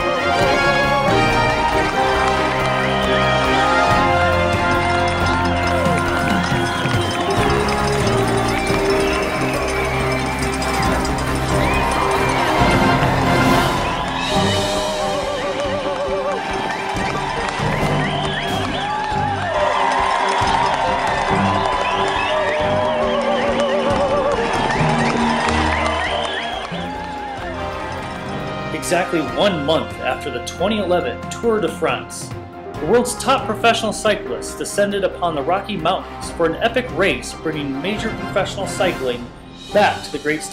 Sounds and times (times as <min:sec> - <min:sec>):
Music: 0:00.0 - 0:40.5
Speech: 0:28.8 - 0:40.5.